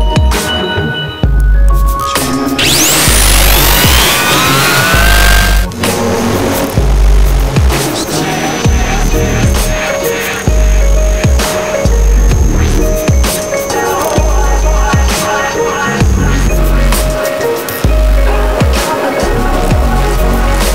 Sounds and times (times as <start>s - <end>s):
Music: 0.0s - 20.7s.